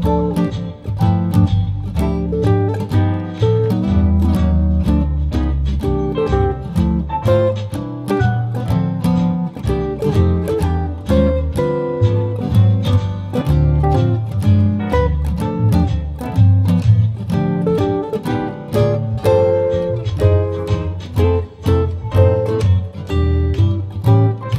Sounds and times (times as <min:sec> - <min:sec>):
Acoustic guitar: 0:00.0 - 0:24.5
Strum: 0:00.0 - 0:24.5.